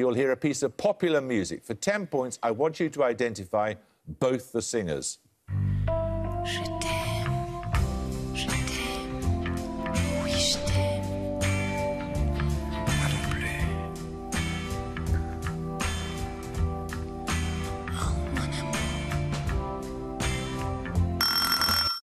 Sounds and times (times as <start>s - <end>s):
Music: 5.5s - 21.4s.